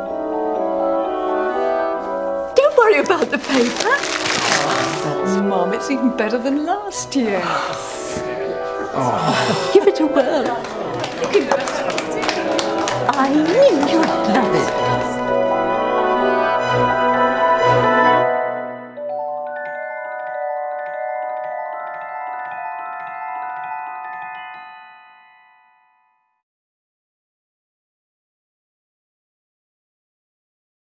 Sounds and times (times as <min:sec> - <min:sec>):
Music: 0:00.0 - 0:26.4
Speech: 0:02.6 - 0:04.0, 0:09.8 - 0:15.0.